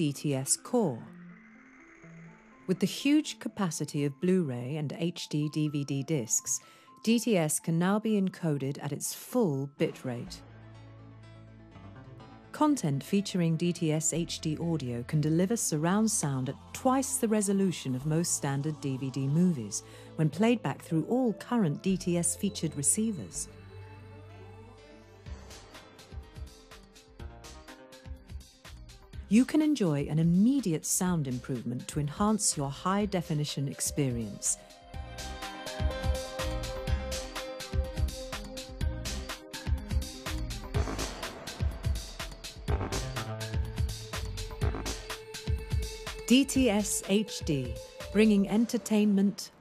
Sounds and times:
Speech: 0.0 - 1.1, 2.7 - 10.4, 12.6 - 23.5, 29.3 - 34.6, 46.3 - 49.6
Music: 0.0 - 49.6.

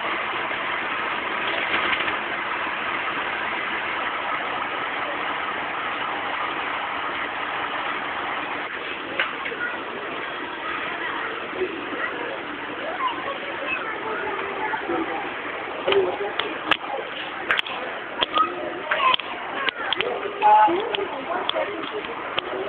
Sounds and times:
Vehicle: 0.0 - 22.6
Speech: 8.9 - 22.6.

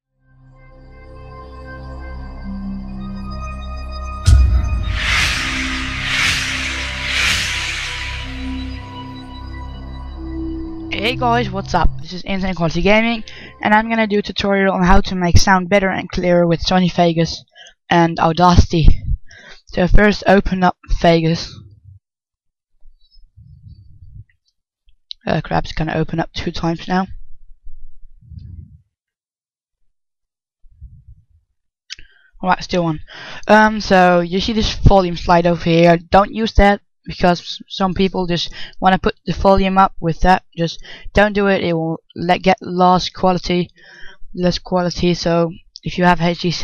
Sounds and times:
Speech: 10.9 - 21.8, 25.1 - 27.2, 31.9 - 46.6.

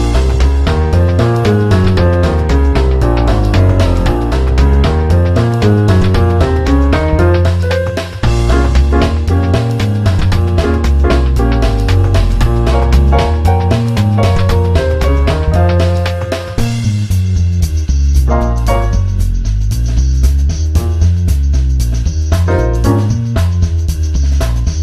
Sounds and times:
Music: 0.0 - 24.8.

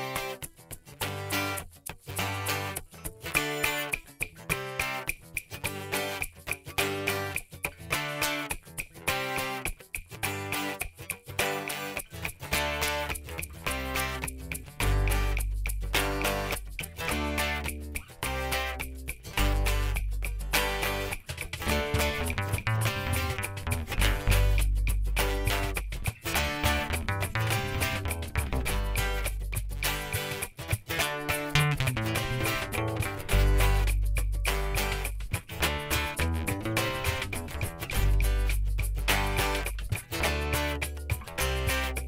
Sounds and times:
Music: 0.0 - 42.0.

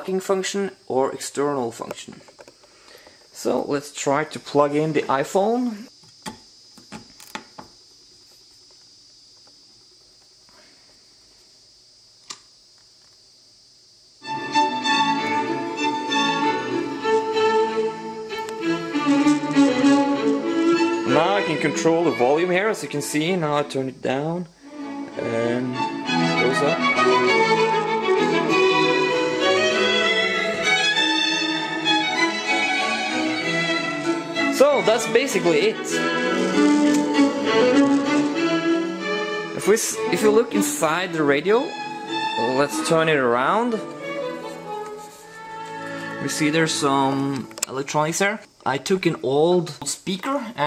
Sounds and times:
Music: 14.2 - 48.4.

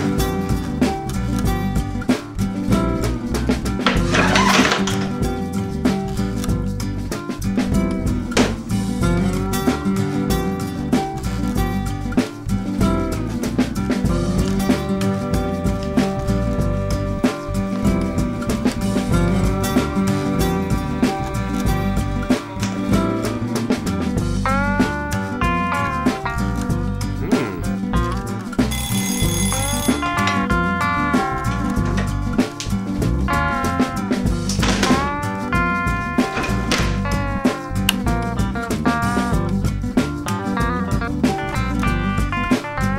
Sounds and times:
Music: 0.0 - 42.9.

